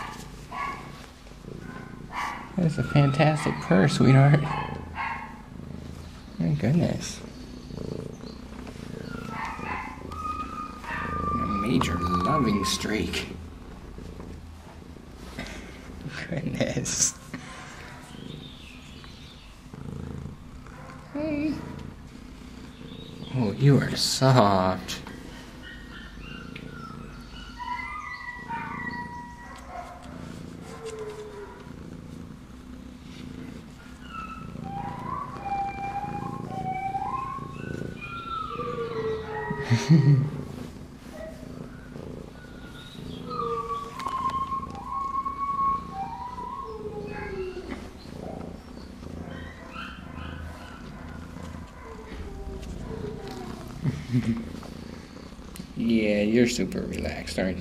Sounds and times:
Purr: 0:00.0 - 0:57.6.

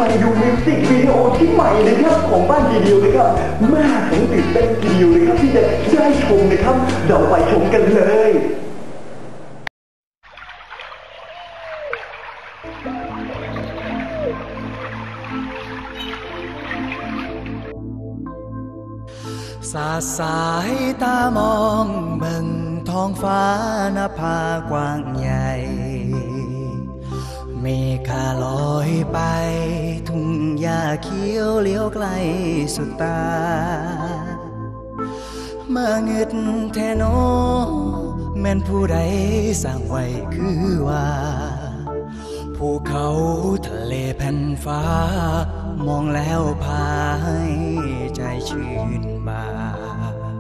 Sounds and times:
New-age music: 0:00.0 - 0:08.6, 0:10.3 - 0:50.4.

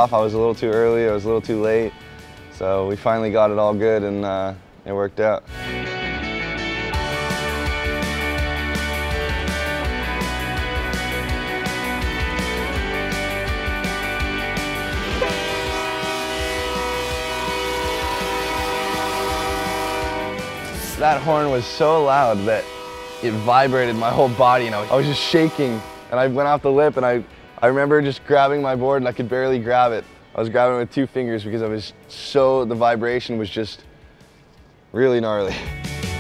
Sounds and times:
Music: 0:00.0 - 0:36.2
Train horn: 0:15.0 - 0:26.4.

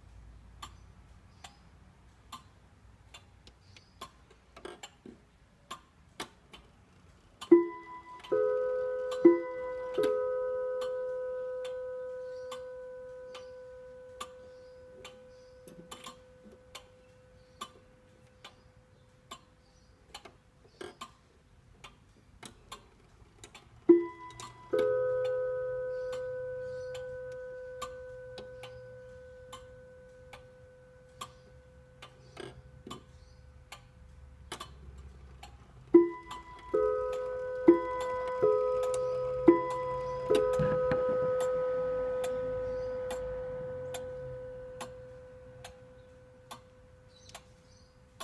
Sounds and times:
Tick-tock: 0:07.4 - 0:21.2, 0:21.8 - 0:47.6.

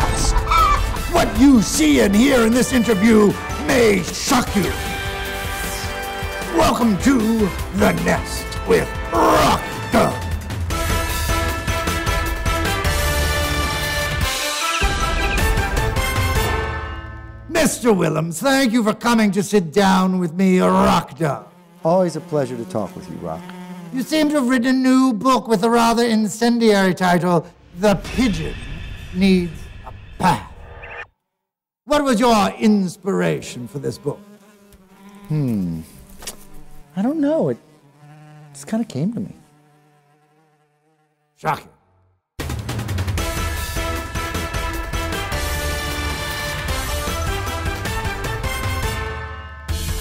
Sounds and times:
Music: 0:00.0 - 0:17.8, 0:42.4 - 0:50.0
Speech: 0:01.1 - 0:04.8, 0:06.5 - 0:10.2, 0:17.5 - 0:23.4, 0:24.0 - 0:29.6, 0:31.9 - 0:34.2, 0:37.0 - 0:37.6, 0:38.6 - 0:39.4, 0:41.4 - 0:41.8.

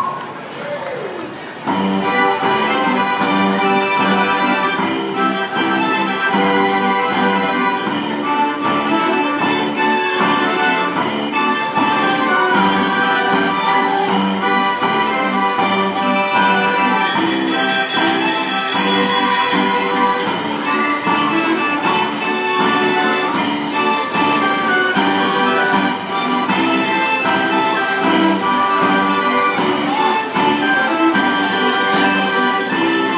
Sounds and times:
Music: 0:01.5 - 0:33.1.

